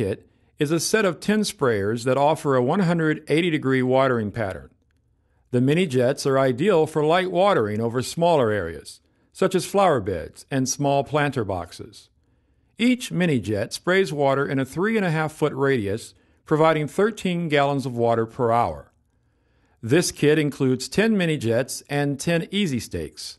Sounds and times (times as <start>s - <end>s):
Speech: 0.0s - 4.8s, 5.5s - 12.1s, 12.8s - 19.0s, 19.8s - 23.3s.